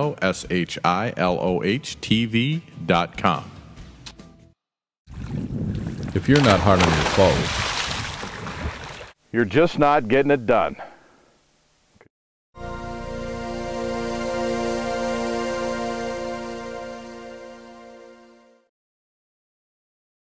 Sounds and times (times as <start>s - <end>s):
Speech: 0.0s - 3.5s, 6.2s - 7.5s, 9.3s - 11.0s
Music: 0.0s - 4.7s, 12.6s - 18.7s.